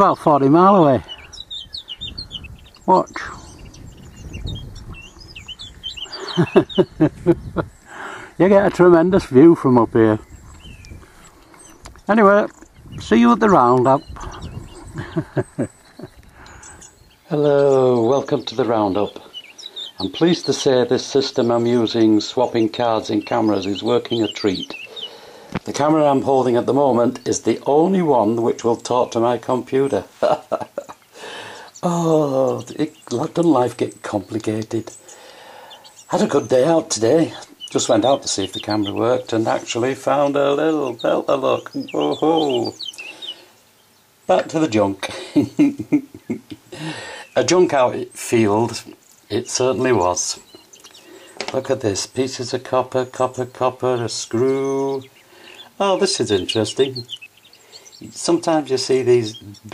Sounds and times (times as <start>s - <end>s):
Speech: 0.0s - 1.1s, 2.9s - 3.5s, 8.4s - 10.2s, 12.1s - 14.1s, 17.3s - 19.3s, 20.0s - 24.8s, 25.7s - 30.1s, 31.8s - 35.0s, 36.1s - 42.8s, 44.3s - 45.2s, 47.4s - 50.5s, 51.4s - 55.1s, 55.8s - 57.1s, 58.0s - 59.7s.